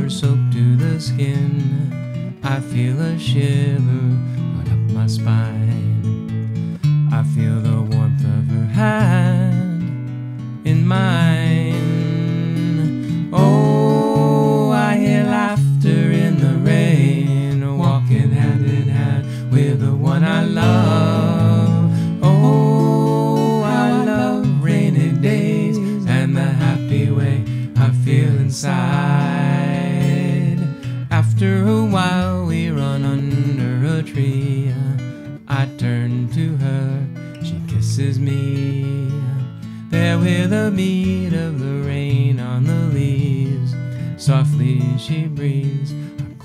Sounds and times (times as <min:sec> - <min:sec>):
Music: 0:00.0 - 0:46.4.